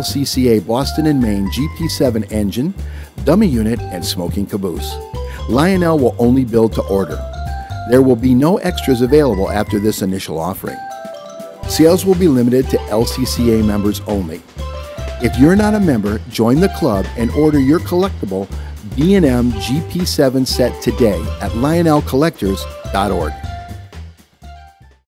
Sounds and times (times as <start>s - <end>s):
Speech: 0.0s - 7.2s, 7.9s - 10.8s, 11.7s - 14.4s, 15.2s - 23.4s
Music: 0.0s - 25.0s.